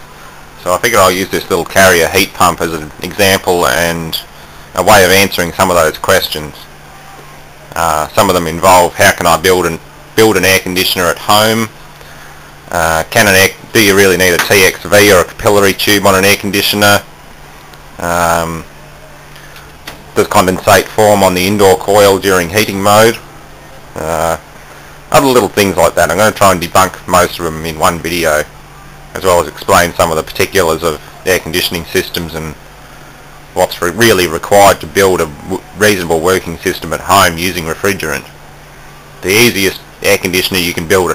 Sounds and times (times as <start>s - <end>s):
Speech: 0.6s - 11.7s, 12.7s - 17.1s, 18.0s - 18.7s, 20.2s - 23.3s, 24.0s - 24.4s, 25.1s - 28.5s, 29.1s - 32.6s, 33.6s - 38.4s, 39.2s - 41.1s.